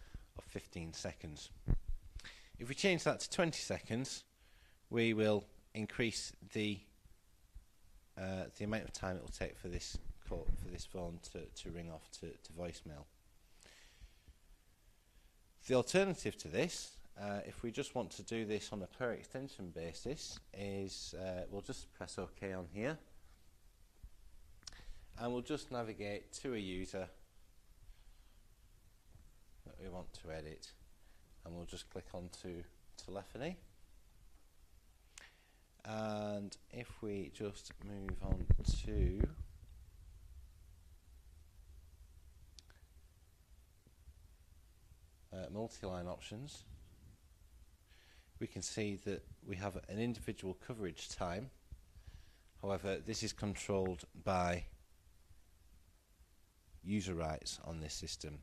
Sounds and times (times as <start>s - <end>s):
Speech: 0.4s - 1.6s, 2.6s - 4.3s, 4.9s - 7.0s, 8.2s - 13.1s, 15.6s - 23.1s, 25.2s - 27.2s, 29.6s - 30.8s, 31.4s - 33.7s, 35.8s - 39.5s, 45.3s - 46.8s, 48.4s - 51.6s, 52.6s - 54.8s, 56.8s - 58.4s.